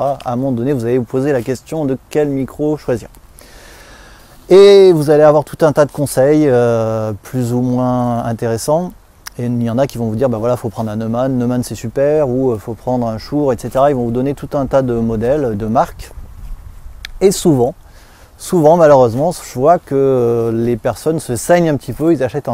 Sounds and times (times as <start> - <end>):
Speech: 0.0 - 3.1, 4.5 - 16.2, 17.2 - 17.8, 18.4 - 22.5.